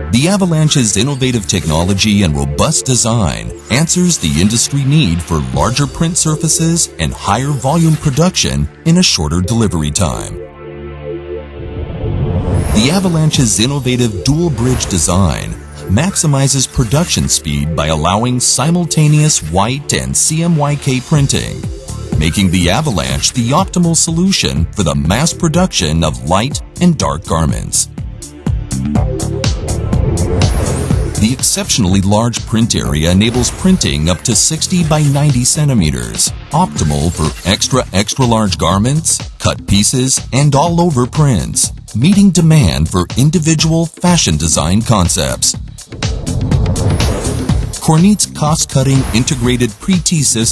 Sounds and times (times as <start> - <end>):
Music: 0.0 - 50.5
Speech: 0.1 - 10.4, 12.8 - 27.9, 31.2 - 45.6, 47.8 - 50.5.